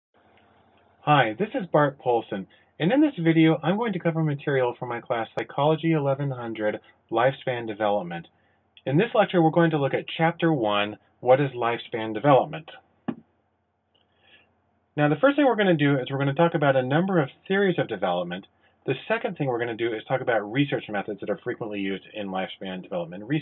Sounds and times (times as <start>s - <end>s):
Speech: 1.0s - 12.8s, 15.0s - 23.4s.